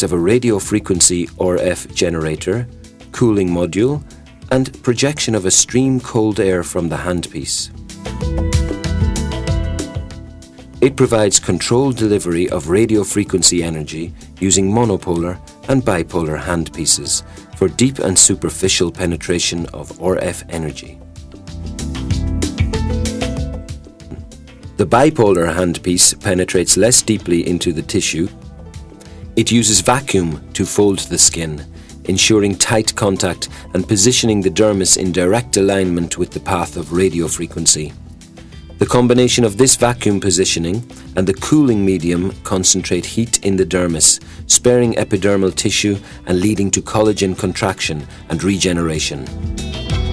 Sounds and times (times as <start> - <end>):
Male speech, man speaking: 0.0 - 7.7, 10.8 - 21.0, 24.8 - 28.3, 29.4 - 38.0, 38.8 - 49.3
Music: 0.0 - 50.1
Narration, monologue: 0.0 - 50.1.